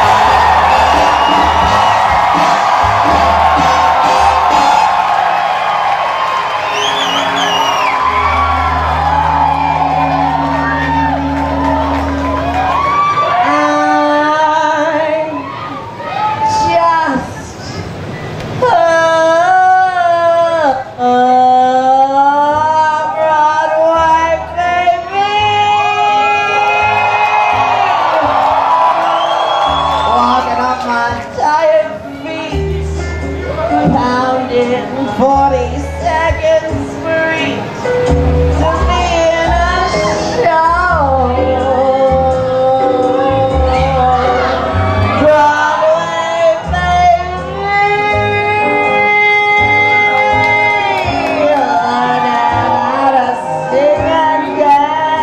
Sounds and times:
Cheering: 0.0 - 16.9, 22.8 - 32.7, 33.3 - 34.3, 38.6 - 55.2
Crowd: 0.0 - 55.2.

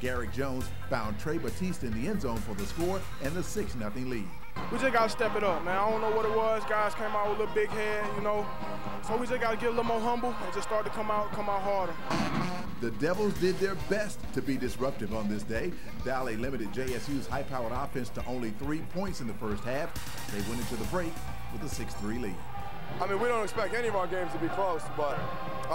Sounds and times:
Speech: 0.0 - 12.0, 12.8 - 22.4, 23.0 - 25.7
Music: 0.0 - 25.7.

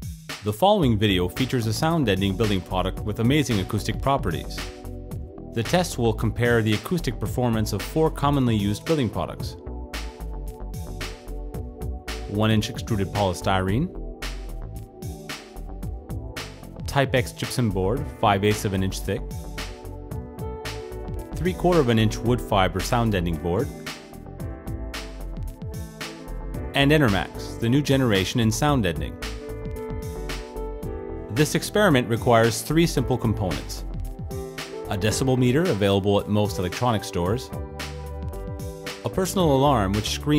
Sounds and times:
Music: 0.0 - 40.3
Speech: 0.4 - 4.7, 5.6 - 9.6, 12.3 - 13.9, 16.8 - 19.2, 21.4 - 23.8, 26.8 - 29.2, 31.3 - 33.9, 34.9 - 37.6, 39.1 - 40.3.

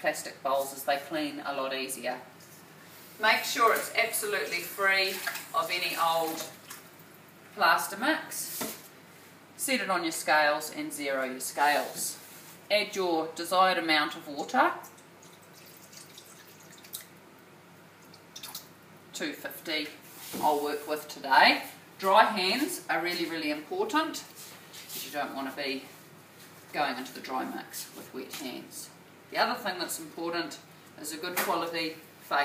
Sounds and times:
Speech: 0.0 - 2.3, 3.2 - 6.6, 7.6 - 8.6, 9.6 - 14.9, 19.2 - 24.4, 25.0 - 25.9, 26.7 - 32.4.

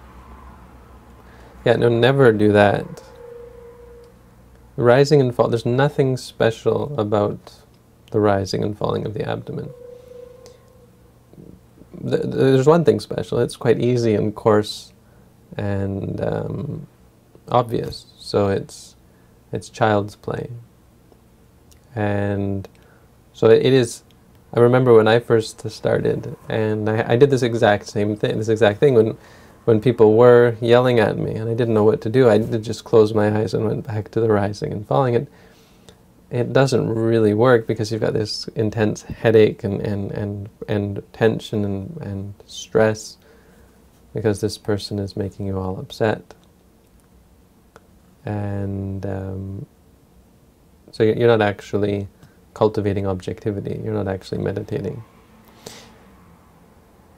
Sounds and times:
Speech: 1.6 - 3.1, 4.8 - 9.8, 11.4 - 20.7, 21.8 - 22.8, 23.4 - 35.3, 36.3 - 43.2, 44.1 - 46.4, 48.2 - 49.7, 50.9 - 55.0.

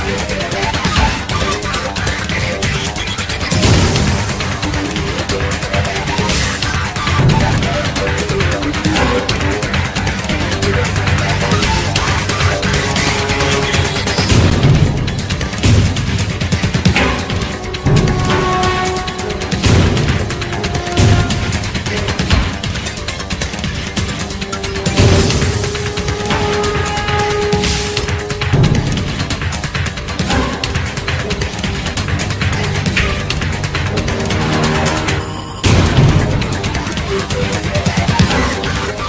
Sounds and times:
Soundtrack music: 0.0 - 39.0.

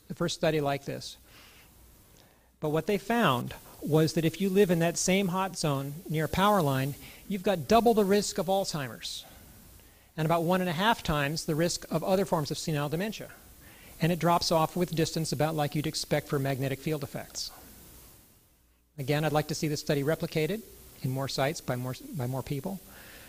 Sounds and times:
Speech: 0.0 - 1.2, 2.6 - 9.3, 10.2 - 13.4, 14.0 - 17.6, 19.0 - 22.8.

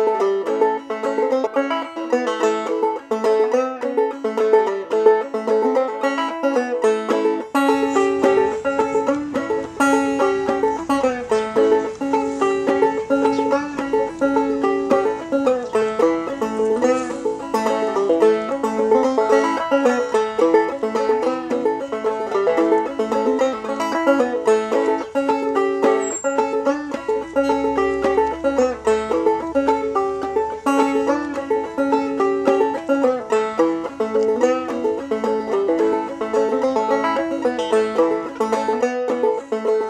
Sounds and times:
Music: 0.0 - 39.9.

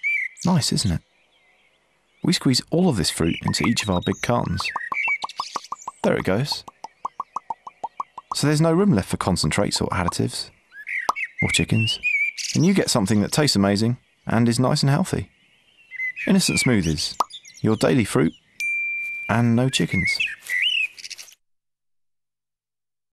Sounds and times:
Speech: 0.4 - 1.0, 2.2 - 4.8, 6.0 - 6.7, 8.3 - 10.5, 11.4 - 12.0, 12.6 - 15.3, 16.3 - 18.3, 19.3 - 20.2.

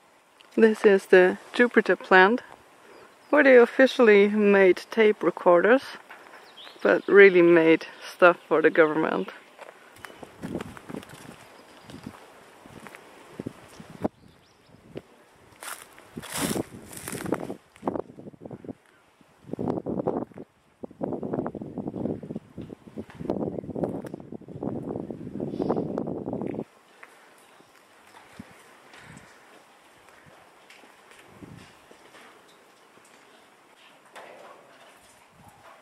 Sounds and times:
Rustling leaves: 0.0 - 35.8.

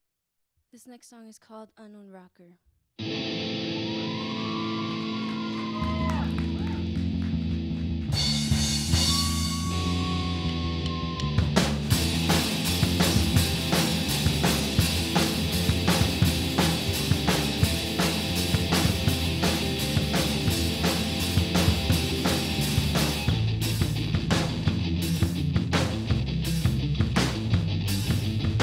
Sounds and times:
Music: 3.0 - 28.6.

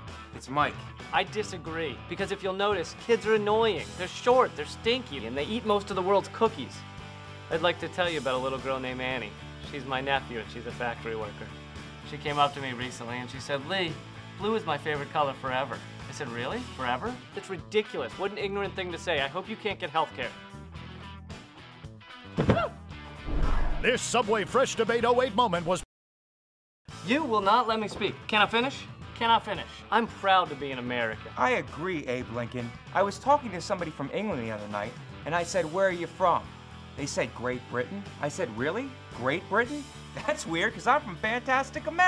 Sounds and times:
Music: 0.0 - 25.9, 26.9 - 42.0
Speech: 0.4 - 6.8, 7.5 - 11.5, 12.1 - 20.4, 23.8 - 25.8, 27.1 - 36.4, 37.0 - 42.0.

